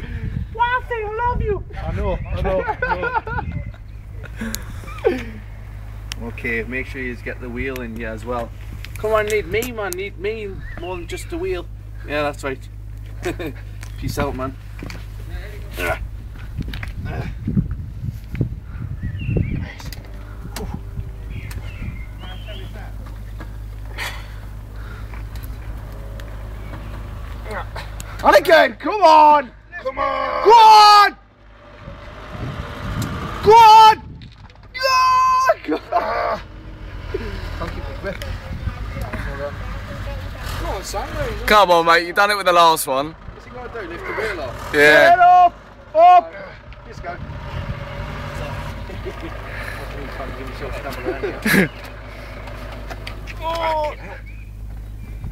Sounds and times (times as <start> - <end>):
Motor vehicle (road): 0.0 - 55.3.